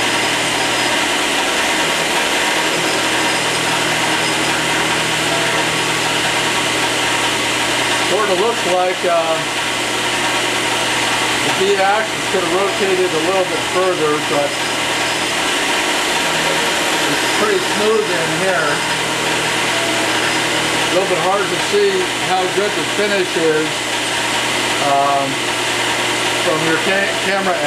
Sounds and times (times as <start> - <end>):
Power tool: 0.0 - 27.6.